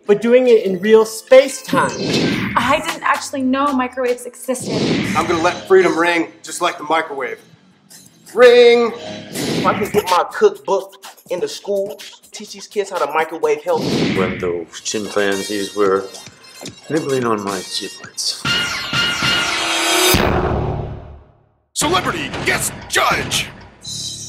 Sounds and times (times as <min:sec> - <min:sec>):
Music: 0:00.0 - 0:20.3, 0:21.8 - 0:24.2
Speech: 0:08.3 - 0:09.0, 0:09.7 - 0:16.1, 0:16.9 - 0:18.4, 0:21.8 - 0:23.5.